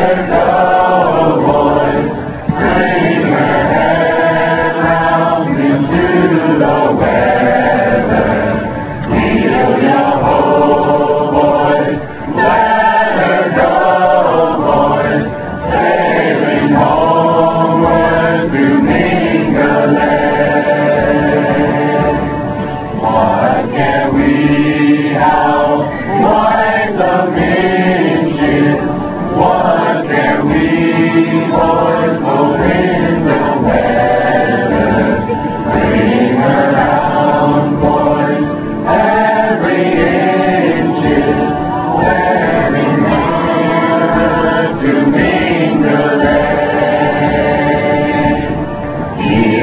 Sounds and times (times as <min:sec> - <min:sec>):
Music: 0:00.0 - 0:49.6.